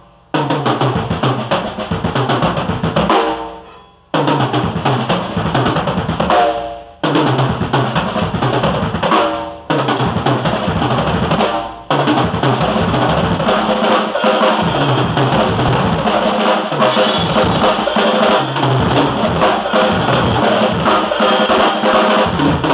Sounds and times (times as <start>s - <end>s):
Snare drum: 0.0s - 3.6s, 4.2s - 22.7s
Drum kit: 0.0s - 22.7s.